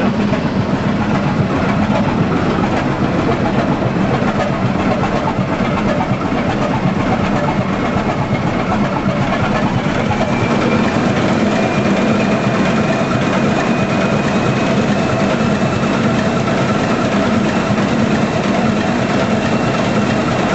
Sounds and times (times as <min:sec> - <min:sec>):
Heavy engine (low frequency): 0:00.0 - 0:20.5.